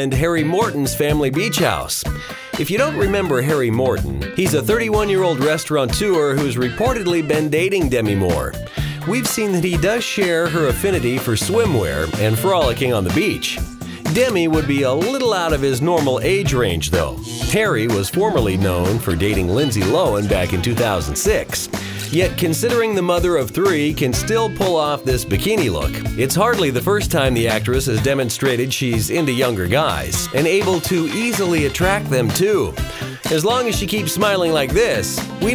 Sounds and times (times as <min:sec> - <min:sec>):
Music: 0:00.0 - 0:35.5
Speech: 0:00.0 - 0:35.5.